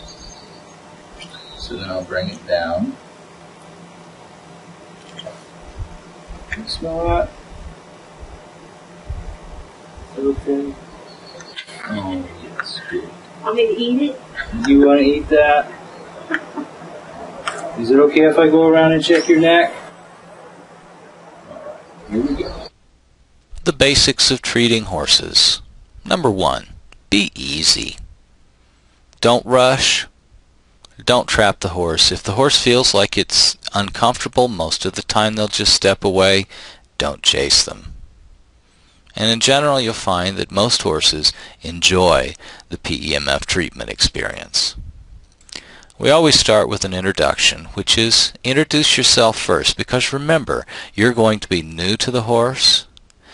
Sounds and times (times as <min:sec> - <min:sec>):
Speech: 0:01.6 - 0:03.0, 0:06.5 - 0:07.4, 0:10.1 - 0:10.8, 0:11.8 - 0:15.8, 0:17.6 - 0:19.9, 0:23.6 - 0:28.0, 0:29.2 - 0:30.1, 0:30.9 - 0:37.9, 0:39.1 - 0:44.8, 0:46.0 - 0:52.9.